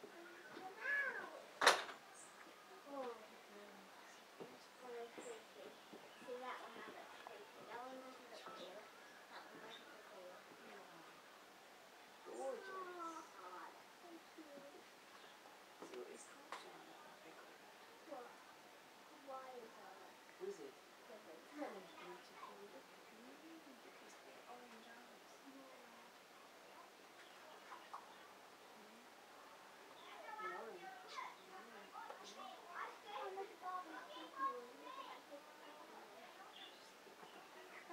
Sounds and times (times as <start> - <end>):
Speech: 2.7 - 11.2, 19.1 - 29.1, 29.9 - 37.9.